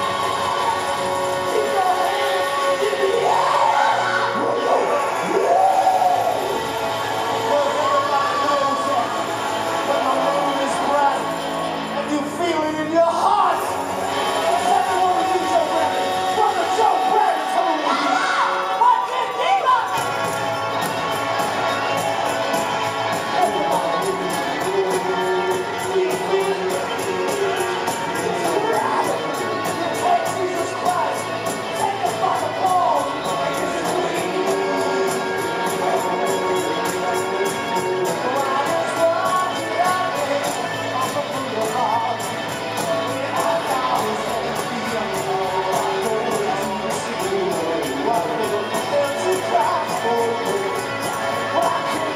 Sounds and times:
Crowd: 0.0 - 52.1
Music: 0.0 - 52.1
Speech: 7.4 - 9.2, 11.9 - 13.7, 14.4 - 20.0, 23.3 - 42.2, 43.0 - 52.1.

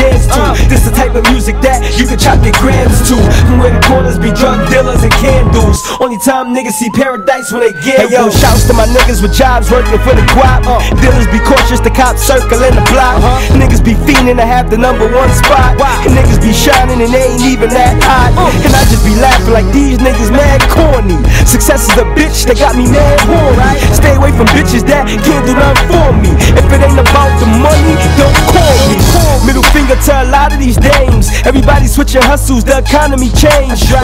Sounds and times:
Music: 0.0 - 34.0.

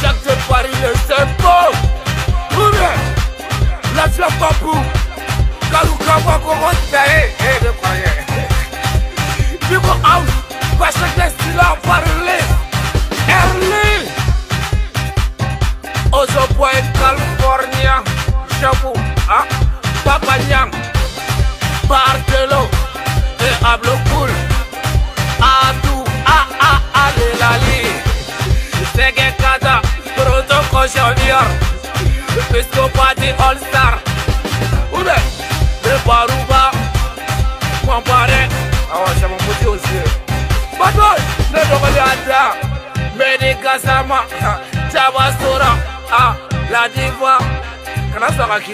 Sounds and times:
Rapping: 0.0 - 15.0, 16.1 - 20.8, 21.8 - 24.7, 25.4 - 48.7
Music: 0.0 - 48.7.

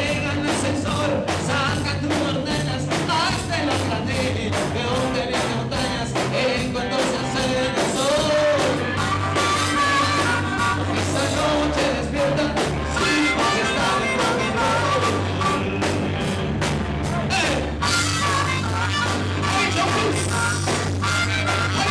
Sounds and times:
Rock and roll: 0.0 - 21.9.

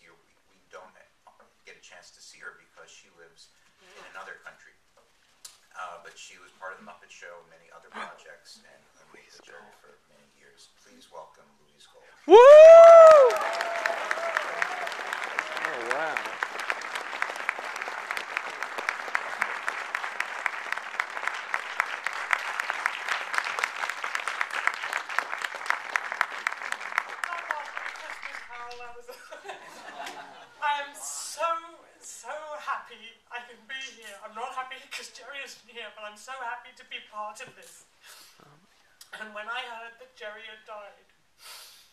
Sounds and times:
Female speech, woman speaking: 27.2 - 29.1, 30.6 - 32.5.

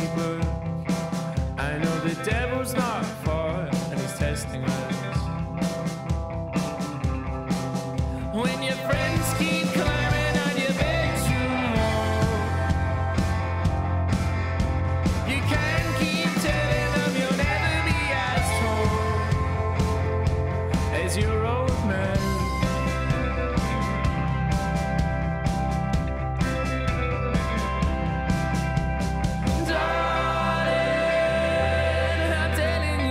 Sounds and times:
Music: 0.0 - 33.1.

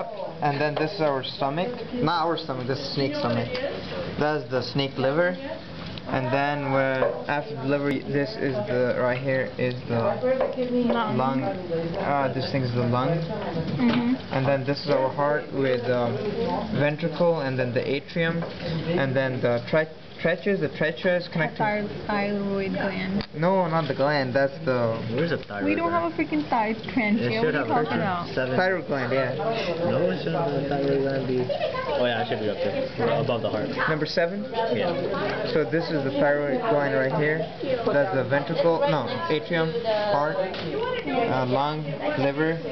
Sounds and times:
Inside, public space: 0.0 - 42.7.

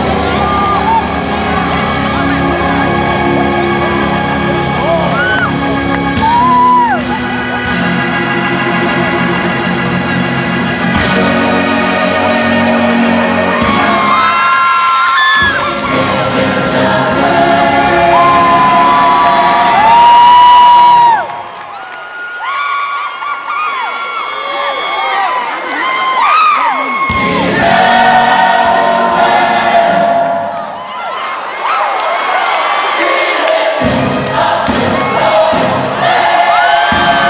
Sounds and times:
Music: 0.0 - 22.4, 27.0 - 31.1, 32.6 - 37.2.

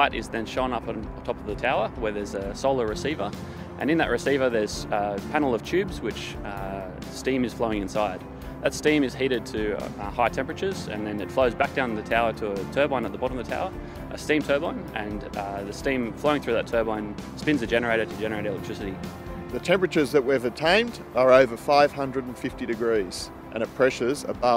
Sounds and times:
Speech: 0.0 - 19.0, 19.6 - 24.5
Music: 0.0 - 24.5.

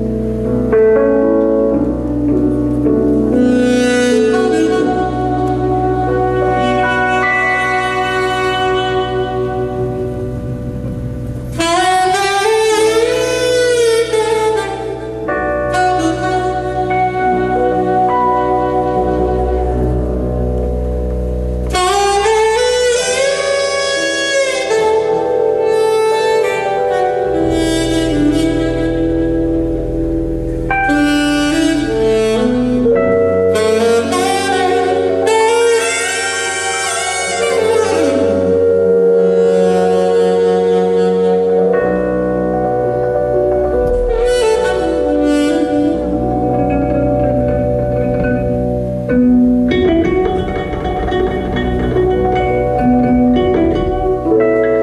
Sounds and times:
Theme music: 0.0 - 54.8.

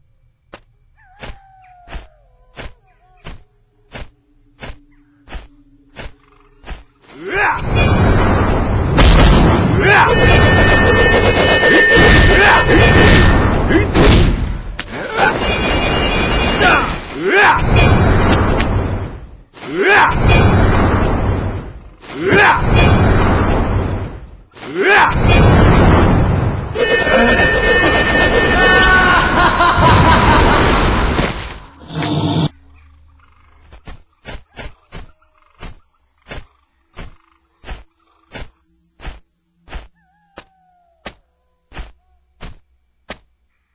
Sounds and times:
Snicker: 29.0 - 31.0.

